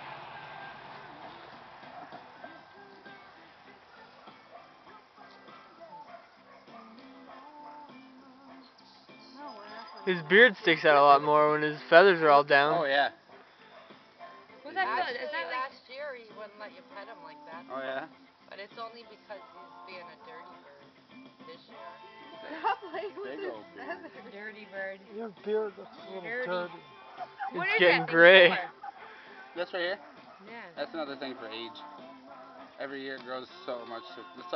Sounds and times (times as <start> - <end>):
Music: 0.0 - 34.5.